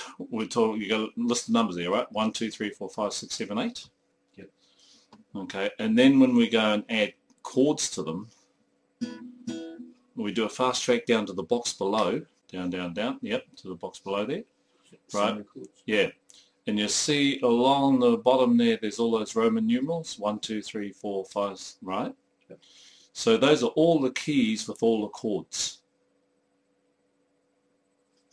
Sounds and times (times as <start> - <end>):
Speech: 0.1 - 4.5, 5.3 - 8.3, 10.2 - 14.5, 15.1 - 22.2, 23.2 - 25.9.